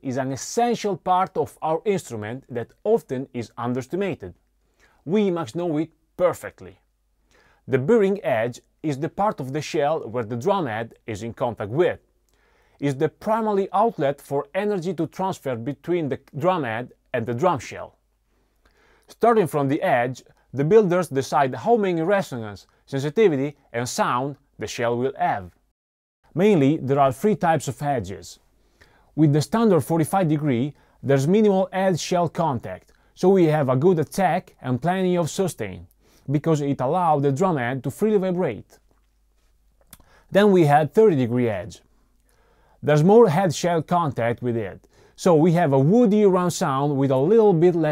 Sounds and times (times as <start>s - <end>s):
Speech: 0.0s - 4.4s, 5.0s - 6.8s, 7.7s - 12.0s, 12.8s - 18.0s, 19.1s - 25.6s, 26.4s - 28.4s, 29.2s - 38.8s, 40.3s - 41.9s, 42.8s - 47.9s.